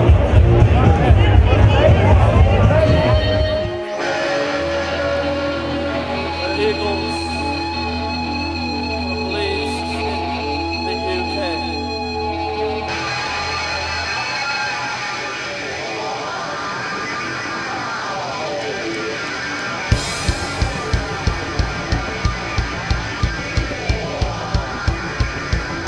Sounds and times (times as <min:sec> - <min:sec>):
Music: 0:00.0 - 0:25.8
Speech: 0:00.5 - 0:03.5, 0:06.4 - 0:07.6, 0:09.3 - 0:10.1, 0:10.8 - 0:11.7.